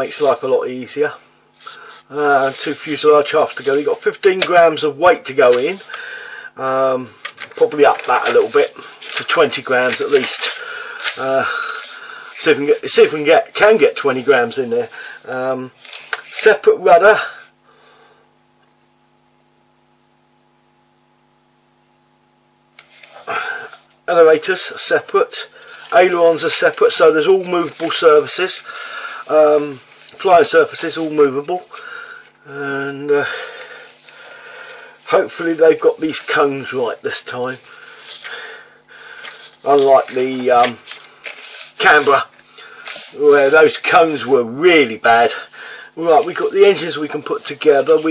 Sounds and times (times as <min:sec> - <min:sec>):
Speech: 0:00.0 - 0:01.2, 0:02.1 - 0:05.9, 0:06.6 - 0:17.4, 0:24.1 - 0:31.7, 0:32.5 - 0:33.4, 0:35.1 - 0:37.6, 0:39.6 - 0:40.8, 0:41.8 - 0:42.3, 0:43.1 - 0:48.1
Inside, small room: 0:00.0 - 0:48.1.